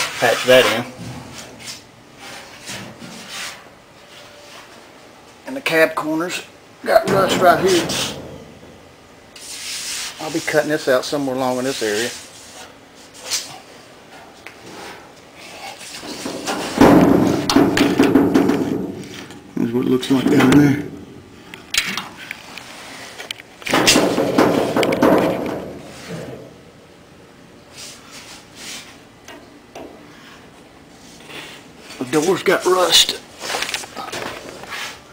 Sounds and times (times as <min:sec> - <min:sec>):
Speech: 0:00.1 - 0:01.0, 0:05.4 - 0:08.2, 0:10.2 - 0:12.2, 0:19.6 - 0:20.9, 0:32.0 - 0:33.3.